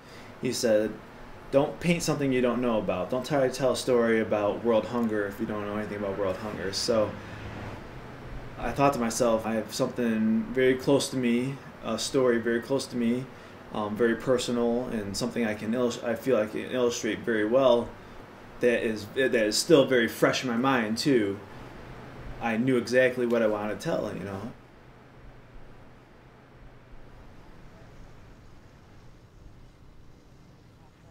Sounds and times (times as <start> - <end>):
Speech: 0.4 - 7.2, 8.6 - 18.0, 18.6 - 21.5, 22.4 - 24.6.